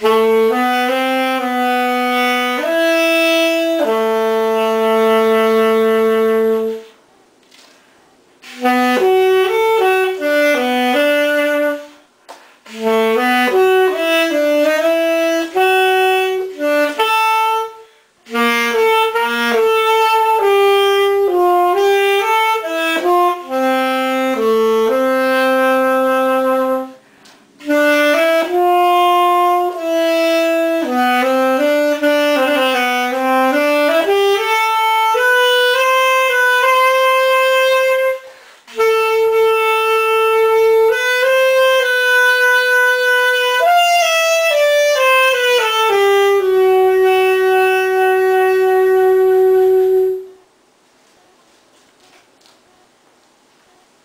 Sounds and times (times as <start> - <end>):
Brass instrument: 0.0 - 7.6, 8.4 - 50.6
Saxophone: 0.0 - 7.8, 8.4 - 53.0.